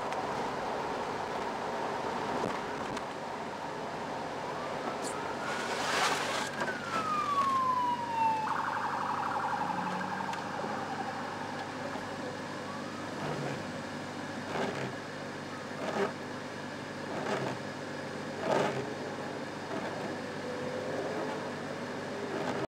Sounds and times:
Vehicle: 0.0s - 22.7s.

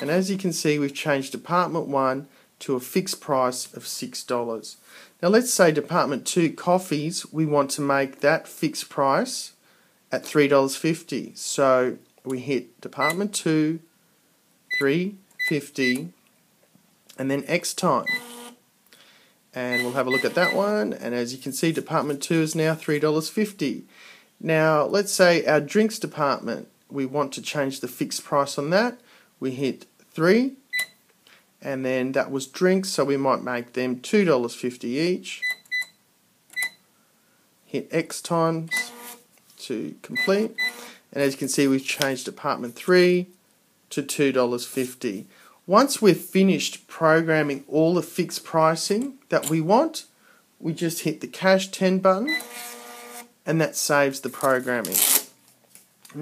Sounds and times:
Speech: 0.0s - 13.9s, 14.8s - 16.2s, 17.1s - 18.1s, 19.6s - 30.6s, 31.6s - 35.4s, 37.7s - 39.0s, 39.6s - 40.6s, 41.2s - 52.4s, 53.5s - 55.1s.

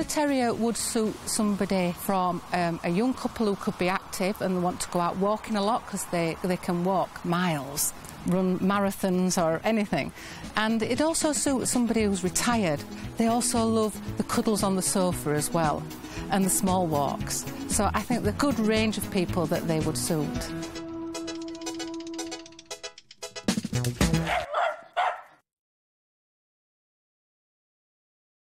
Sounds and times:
Bow-wow: 24.2s - 25.4s.

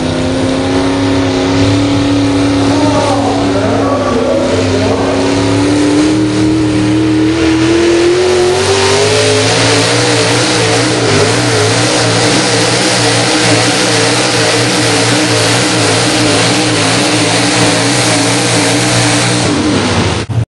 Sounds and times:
Truck: 0.0s - 20.4s.

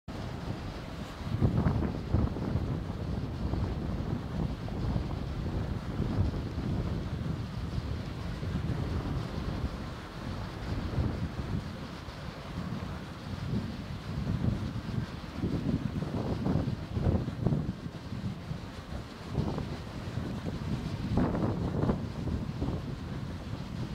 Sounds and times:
Wind: 0.0s - 23.9s.

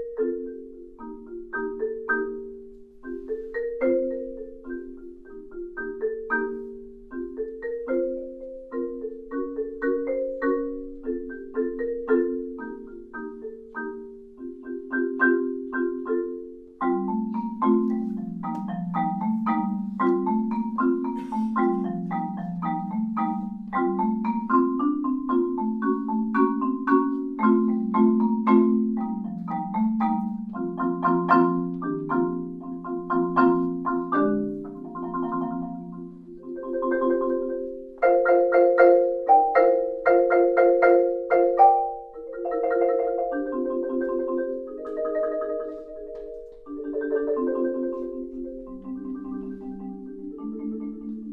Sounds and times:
Music: 0.0s - 51.3s.

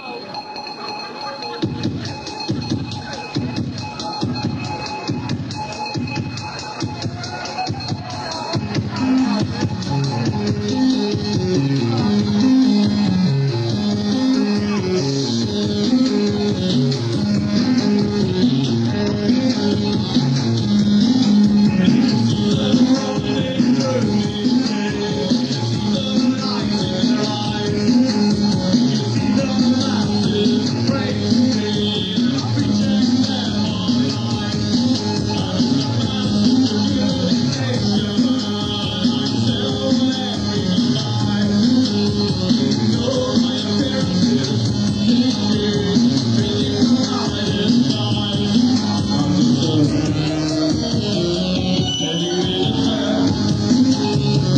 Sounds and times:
Music of Latin America: 0.0s - 54.5s.

